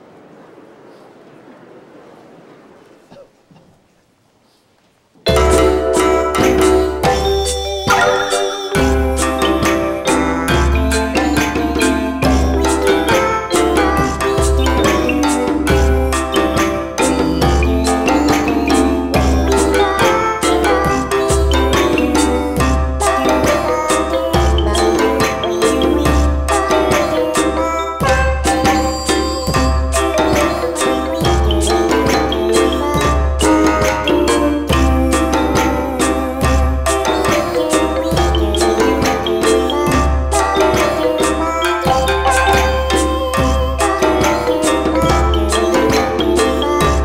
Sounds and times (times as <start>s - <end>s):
Music: 5.3s - 47.0s.